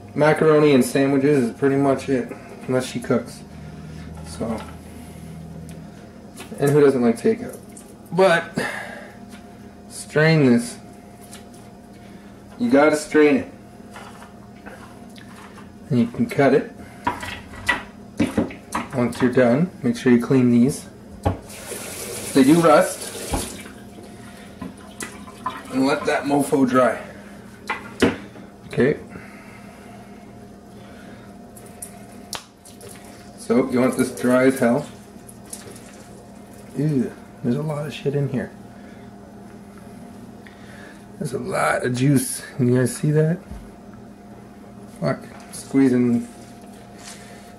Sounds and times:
Sink (filling or washing): 21.5 - 23.8
Water tap, faucet: 21.5 - 23.8
Water: 24.8 - 26.1, 35.0 - 36.8.

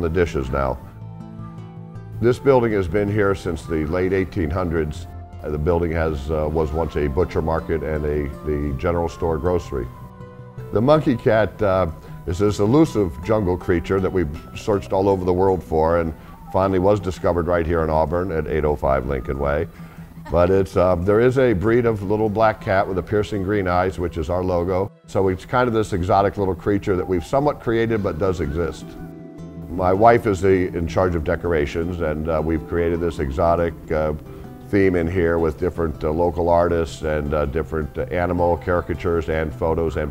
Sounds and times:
Speech: 0.0 - 0.9, 2.2 - 9.9, 10.7 - 19.7, 20.3 - 29.0, 29.7 - 40.1
Music: 0.0 - 40.1.

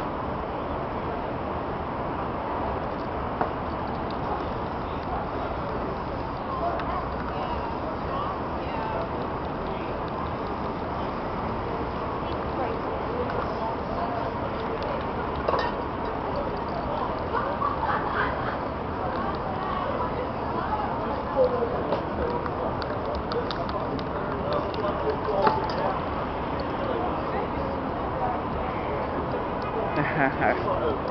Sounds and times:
Speech: 4.3 - 31.1.

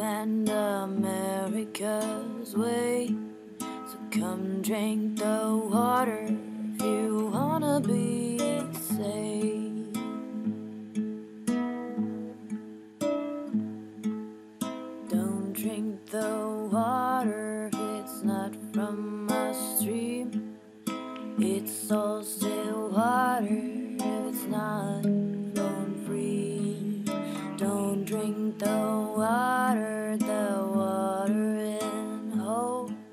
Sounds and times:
Music: 0.0 - 33.1.

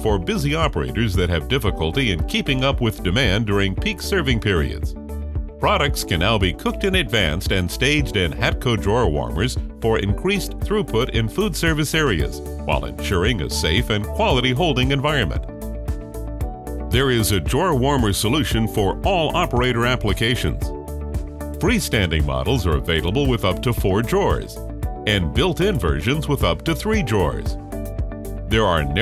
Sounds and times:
Speech: 0.0 - 4.9, 5.6 - 15.5, 16.9 - 20.7, 21.6 - 27.6, 28.5 - 29.0
Music: 0.0 - 29.0.

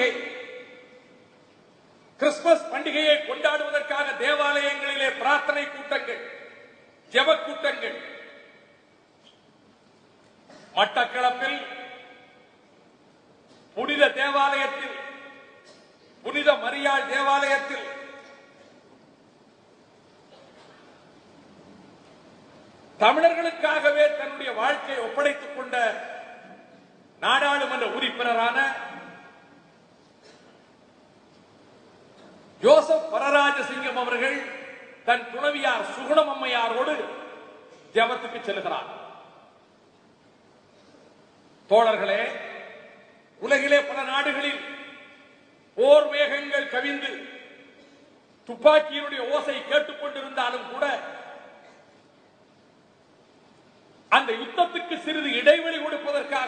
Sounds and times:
Male speech, man speaking: 0.0 - 0.4, 2.2 - 6.4, 7.2 - 8.3, 10.8 - 12.1, 13.8 - 15.4, 16.2 - 18.2, 23.0 - 26.2, 27.2 - 29.2, 32.6 - 37.4, 38.0 - 39.0, 41.7 - 42.7, 43.4 - 45.1, 45.8 - 47.4, 48.5 - 51.3, 54.2 - 56.4
Narration, monologue: 0.0 - 56.4.

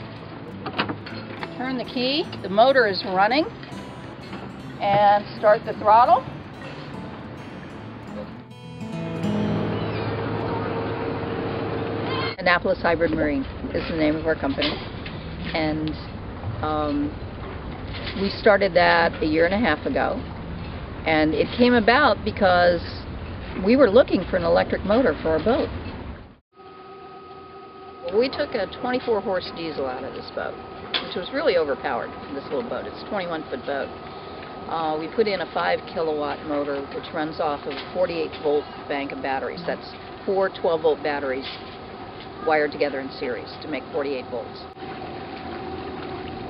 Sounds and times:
Boat, Water vehicle: 0.0 - 3.5, 10.4 - 26.4, 28.1 - 46.4
Speech: 1.6 - 3.5, 4.8 - 6.2, 12.4 - 14.8, 15.5 - 17.2, 18.2 - 20.2, 21.1 - 23.0, 23.6 - 25.7, 28.1 - 33.9, 34.7 - 41.6, 42.4 - 44.7.

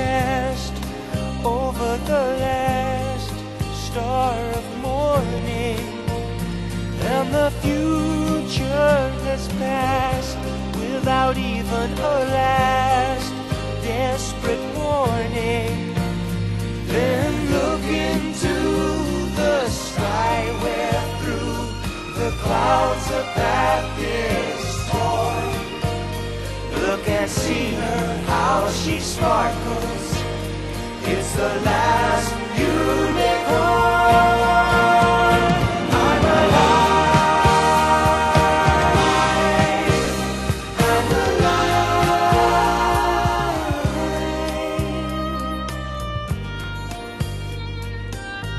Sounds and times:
Music: 0.0 - 48.5.

